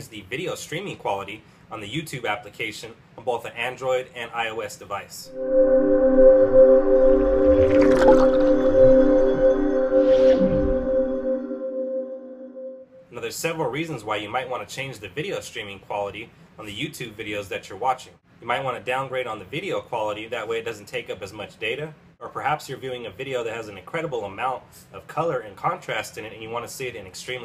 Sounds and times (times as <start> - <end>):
Speech: 0.0 - 5.3, 13.1 - 27.4
Music: 5.3 - 13.0.